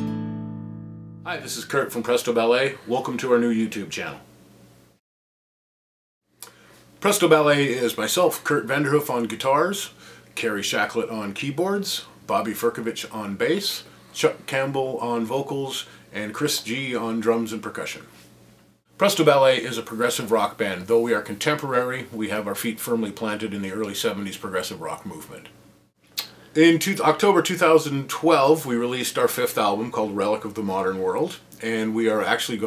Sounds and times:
Speech: 1.3 - 4.3, 7.0 - 18.1, 19.0 - 25.6, 26.2 - 32.6.

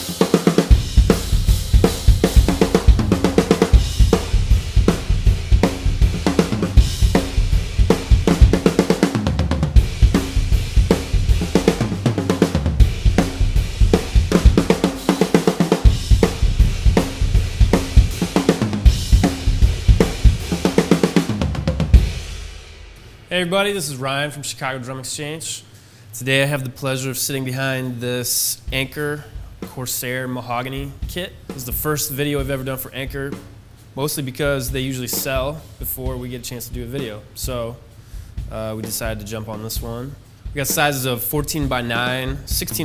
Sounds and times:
Drum: 0.0 - 24.1, 28.6 - 42.8
Speech: 23.3 - 33.4, 34.0 - 37.8, 38.5 - 42.8.

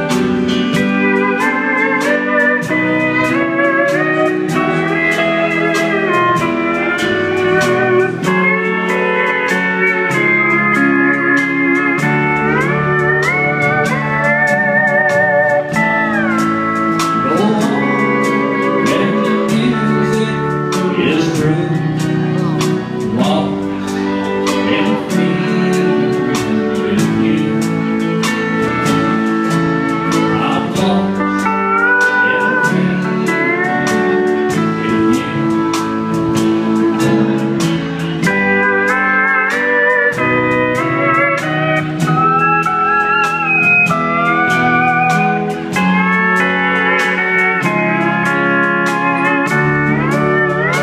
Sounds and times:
Steel guitar, slide guitar: 0.0 - 50.8.

